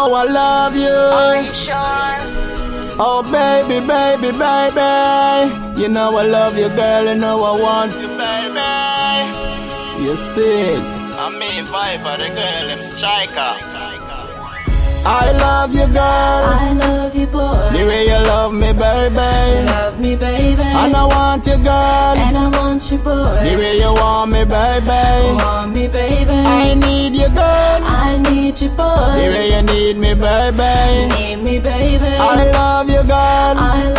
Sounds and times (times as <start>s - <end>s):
Pop music: 0.0s - 33.9s.